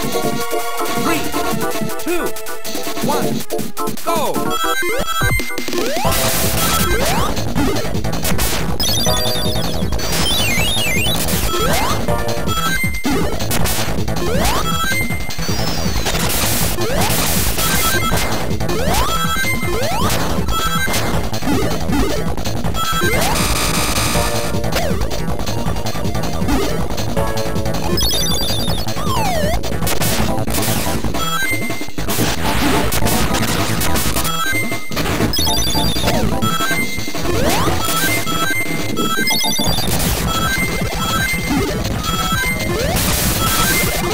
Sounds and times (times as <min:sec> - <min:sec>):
Electronic music: 0:08.8 - 0:13.3, 0:14.1 - 0:29.9, 0:32.6 - 0:44.1.